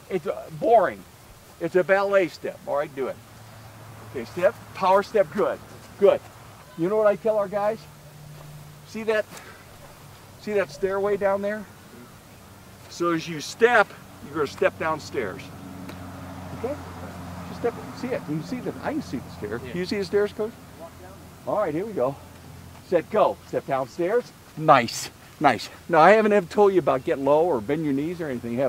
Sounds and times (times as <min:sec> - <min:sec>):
Speech: 0:08.9 - 0:09.3, 0:10.4 - 0:12.1, 0:12.9 - 0:15.5, 0:17.5 - 0:22.2, 0:22.8 - 0:28.6.